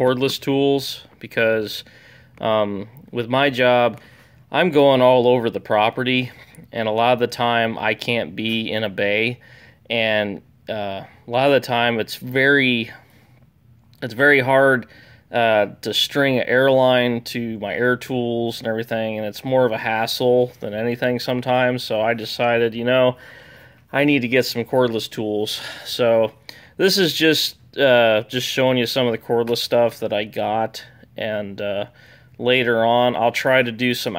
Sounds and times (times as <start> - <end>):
Speech: 0.0 - 13.1, 14.0 - 23.2, 23.9 - 34.1.